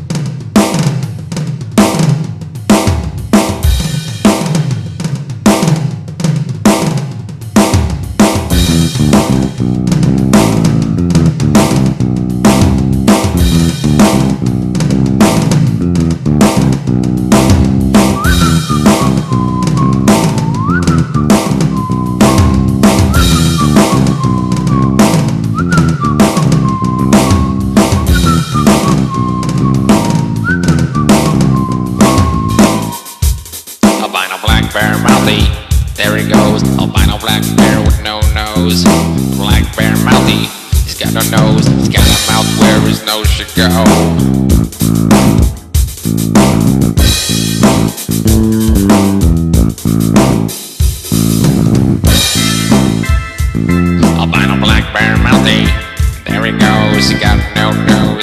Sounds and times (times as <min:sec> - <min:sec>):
Blues: 0:00.0 - 0:58.2.